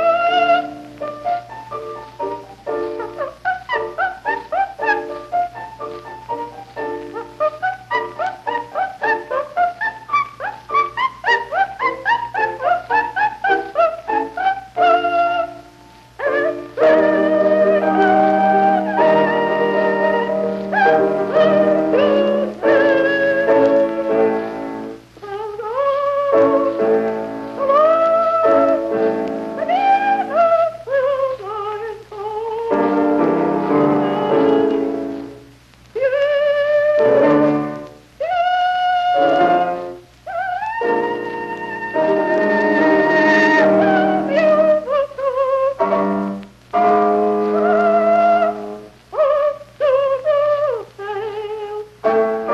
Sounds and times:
Music: 0.0s - 52.5s.

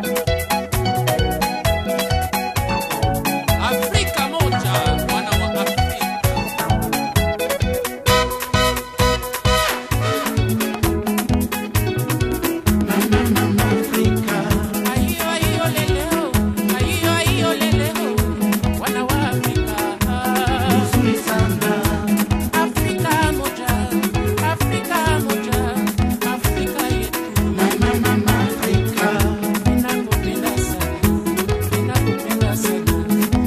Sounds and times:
Music of Africa: 0.0s - 33.4s.

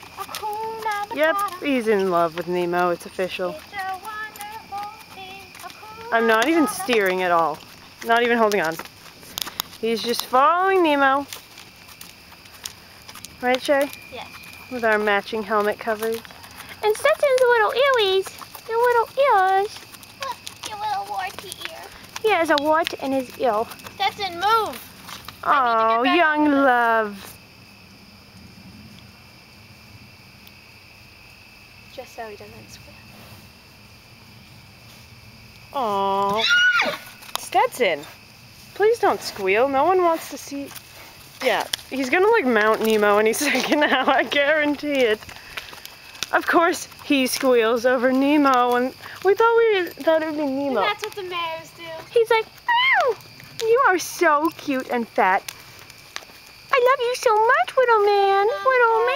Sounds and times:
Clip-clop: 0.0s - 59.1s.

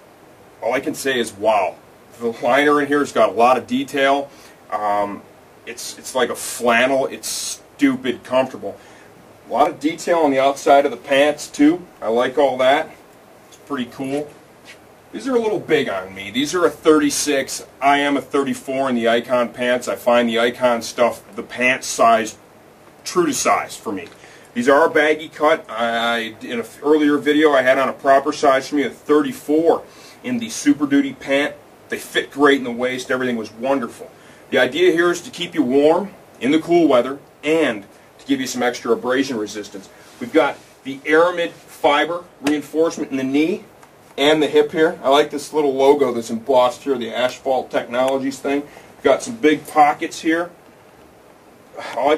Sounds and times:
Speech: 0.6s - 8.8s, 9.5s - 13.0s, 13.6s - 14.4s, 15.1s - 22.4s, 23.0s - 50.6s, 51.8s - 52.1s.

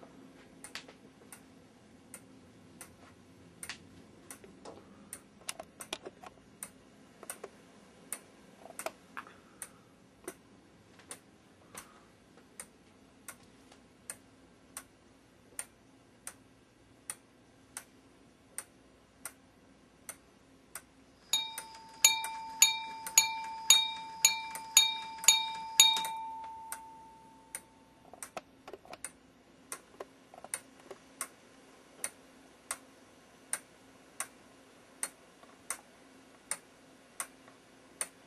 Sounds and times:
Tick-tock: 2.1s - 6.0s, 6.6s - 9.0s, 12.6s - 13.5s, 14.1s - 15.0s, 15.6s - 19.4s, 20.0s - 31.4s, 32.0s - 32.9s, 33.5s - 34.4s, 35.0s - 38.2s
Tick: 15.6s - 16.4s, 32.0s - 32.8s, 35.0s - 35.8s.

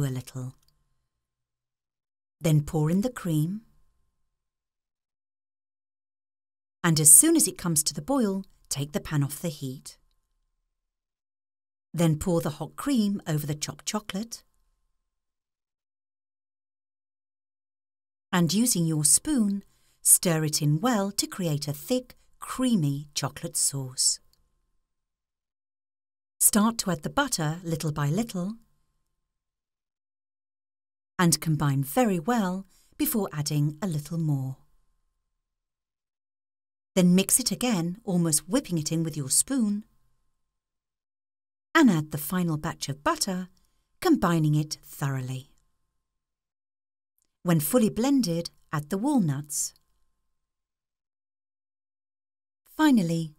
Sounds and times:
Speech: 0.0s - 0.6s, 2.4s - 3.7s, 6.9s - 10.0s, 12.0s - 14.4s, 18.4s - 24.3s, 26.4s - 28.6s, 31.2s - 34.6s, 37.0s - 39.9s, 41.8s - 45.6s, 47.5s - 49.8s, 52.7s - 53.3s.

